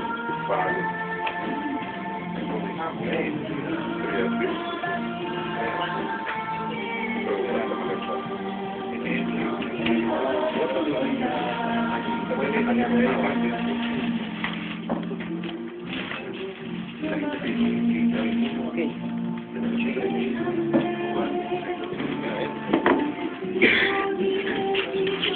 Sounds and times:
Music: 0.0s - 25.3s.

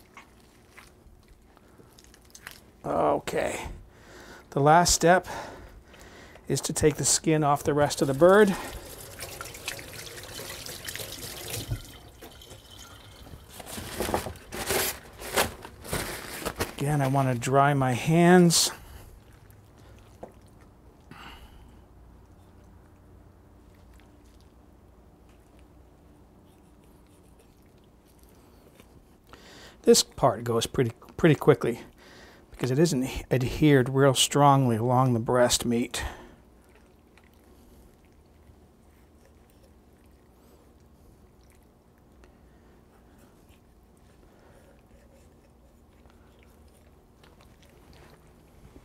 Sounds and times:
Inside, small room: 0.0s - 48.8s
Speech: 2.8s - 3.8s, 4.5s - 5.3s, 6.5s - 8.6s, 16.8s - 18.8s, 29.8s - 31.9s, 32.6s - 36.3s
Water tap, faucet: 8.1s - 13.5s.

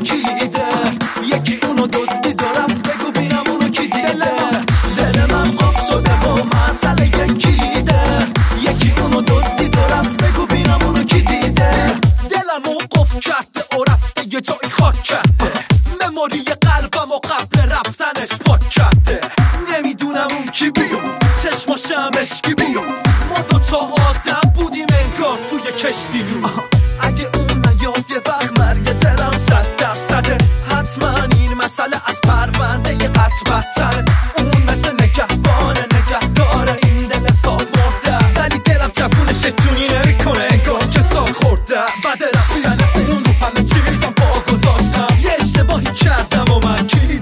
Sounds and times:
Exciting music: 0.0s - 13.2s, 18.6s - 47.2s
Dance music: 0.0s - 47.2s.

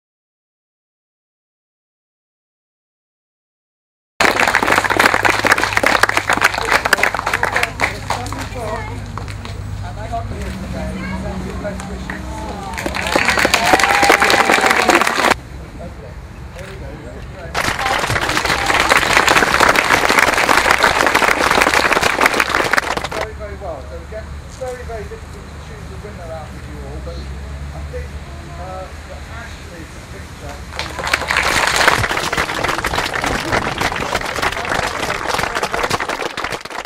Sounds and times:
Inside, public space: 4.2s - 36.8s.

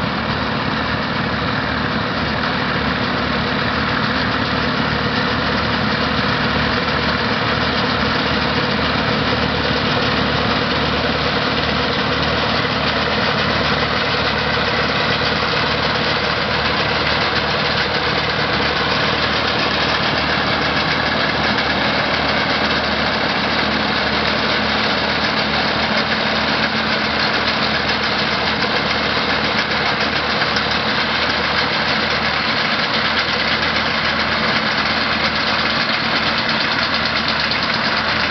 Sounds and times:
Vehicle: 0.0s - 38.3s.

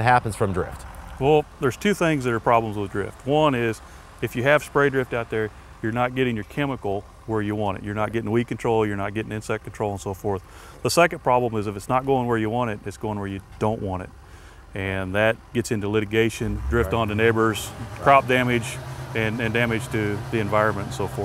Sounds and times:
Speech: 0.0s - 14.1s, 14.8s - 21.2s.

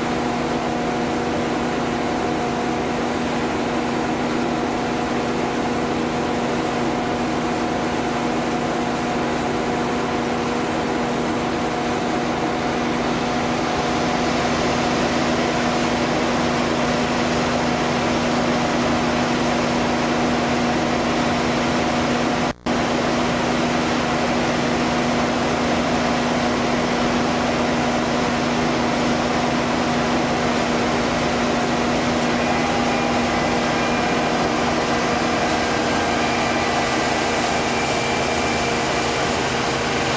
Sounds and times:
Outside, rural or natural: 0.0s - 40.1s.

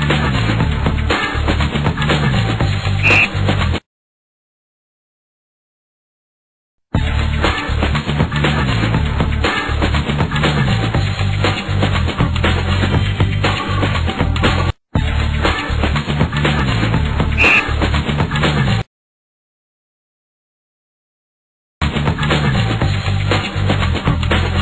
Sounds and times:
Music: 0.0s - 3.8s, 6.9s - 18.9s, 21.8s - 24.6s.

